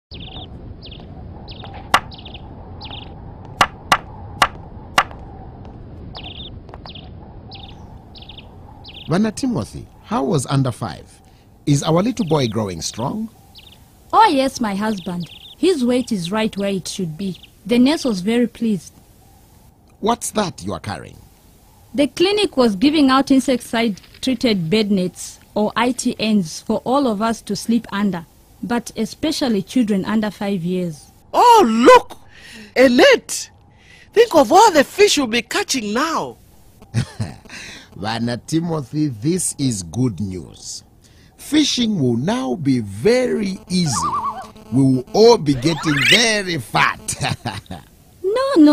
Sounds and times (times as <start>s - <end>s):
Outside, rural or natural: 0.0s - 48.7s.